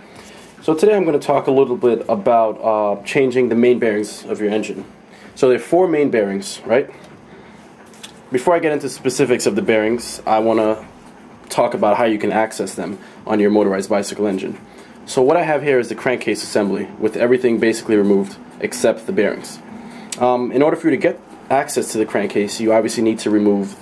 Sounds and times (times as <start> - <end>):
Speech: 0.6 - 7.0, 8.3 - 10.9, 11.5 - 19.6, 20.2 - 23.8.